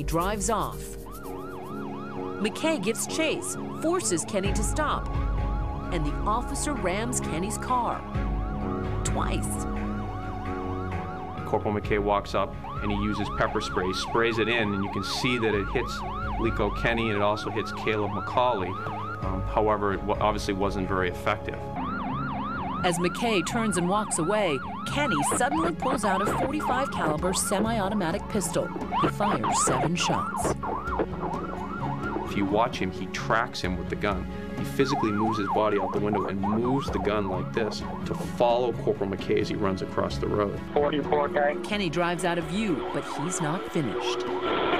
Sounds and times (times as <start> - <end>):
Speech: 0.0 - 0.9, 2.4 - 5.0, 6.0 - 8.0, 9.1 - 9.6, 11.5 - 21.6, 22.9 - 30.5, 32.3 - 44.2.